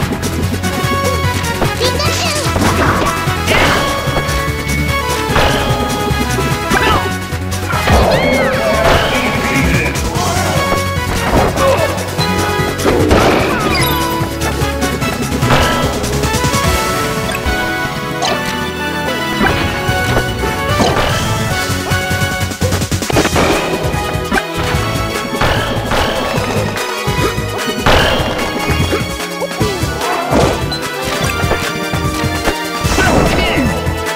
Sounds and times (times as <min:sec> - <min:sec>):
Music: 0:00.0 - 0:34.1.